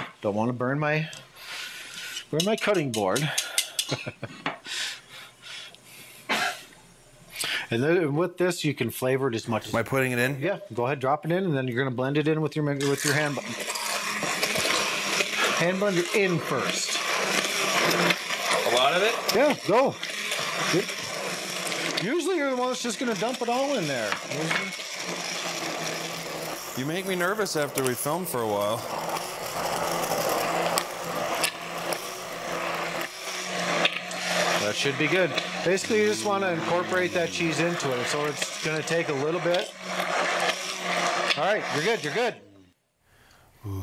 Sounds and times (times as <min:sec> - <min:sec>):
Speech: 0:00.2 - 0:01.2, 0:02.3 - 0:03.4, 0:07.7 - 0:13.5, 0:15.6 - 0:16.9, 0:18.7 - 0:20.0, 0:22.0 - 0:24.7, 0:26.8 - 0:28.9, 0:34.6 - 0:39.7, 0:41.4 - 0:42.4.